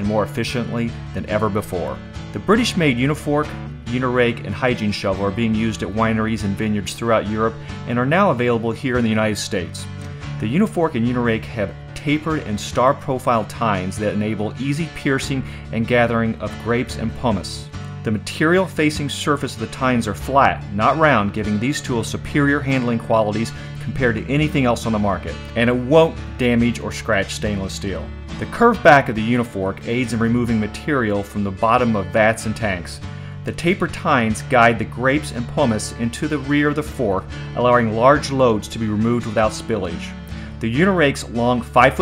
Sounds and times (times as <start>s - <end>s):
Music: 0.0s - 42.0s
Speech: 0.0s - 42.0s.